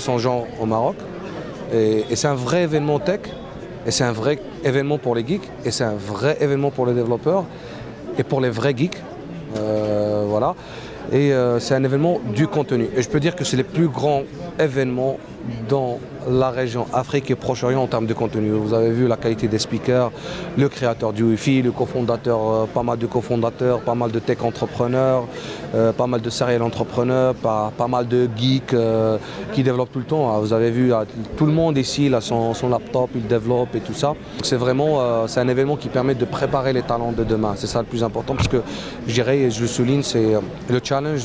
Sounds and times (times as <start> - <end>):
Speech: 0.0 - 1.0, 1.7 - 7.5, 8.1 - 41.2.